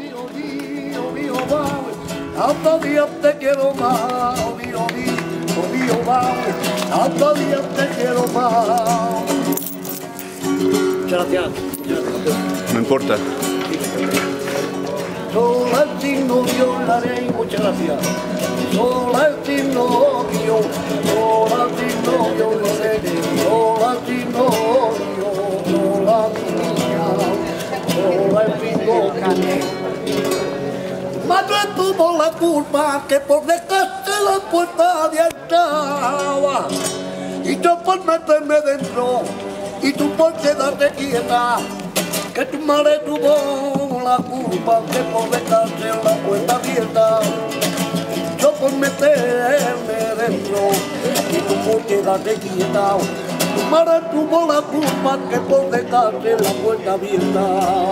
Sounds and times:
Flamenco: 0:00.0 - 0:57.9
Speech: 0:11.1 - 0:15.2.

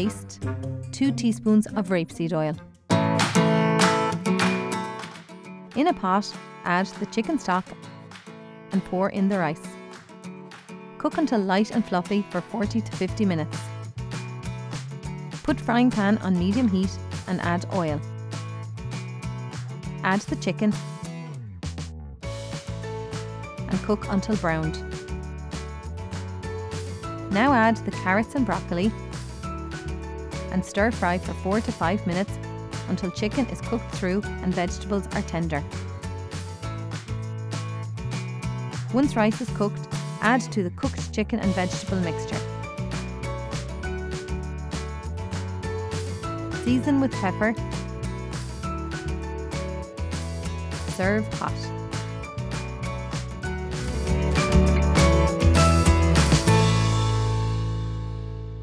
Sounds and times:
Speech: 0:00.0 - 0:00.4, 0:01.0 - 0:02.6, 0:05.8 - 0:07.7, 0:08.8 - 0:09.7, 0:11.0 - 0:13.6, 0:15.5 - 0:18.0, 0:20.0 - 0:20.8, 0:23.7 - 0:24.8, 0:27.3 - 0:29.0, 0:30.5 - 0:32.3, 0:32.9 - 0:35.7, 0:38.9 - 0:42.4, 0:46.6 - 0:47.6, 0:50.9 - 0:51.7
Music: 0:00.0 - 0:58.6.

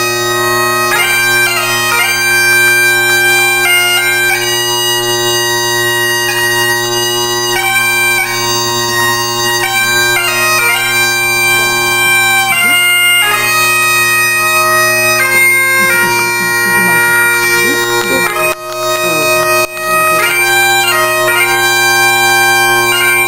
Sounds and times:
Wedding music: 0:12.3 - 0:23.2.

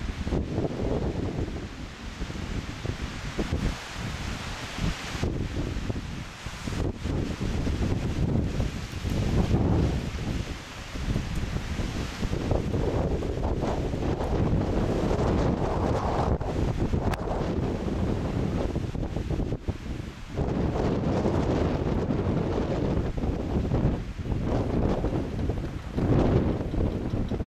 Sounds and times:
Wind noise (microphone): 0:00.0 - 0:27.4.

